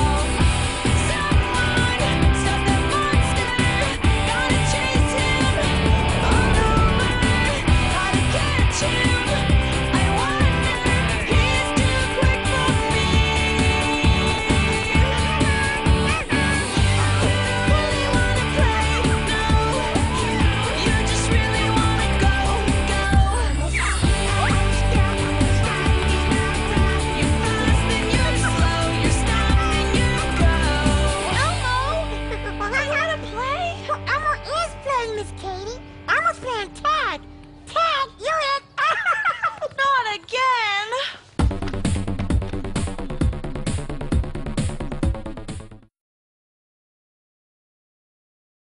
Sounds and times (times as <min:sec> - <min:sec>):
Singing: 0:00.0 - 0:31.9.